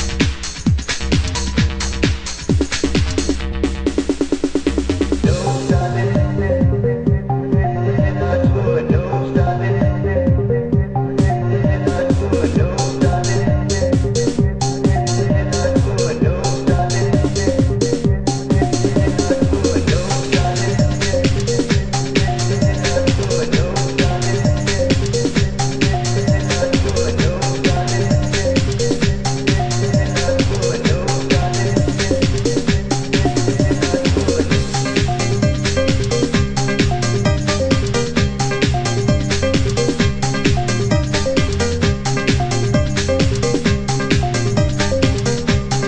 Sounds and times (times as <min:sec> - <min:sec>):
Electronica: 0:00.0 - 0:45.8.